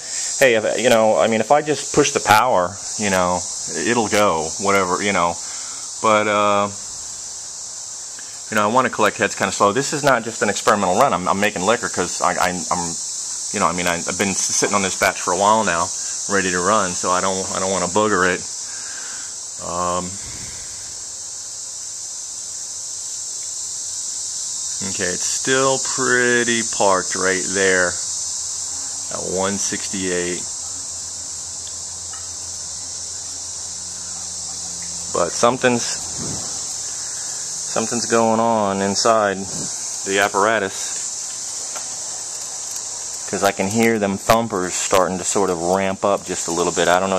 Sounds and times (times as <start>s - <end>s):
Speech: 0.3s - 5.4s, 6.0s - 6.8s, 8.5s - 13.0s, 13.6s - 18.5s, 19.6s - 20.2s, 24.8s - 28.0s, 28.7s - 30.8s, 34.6s - 36.0s, 37.7s - 41.0s, 43.3s - 47.1s.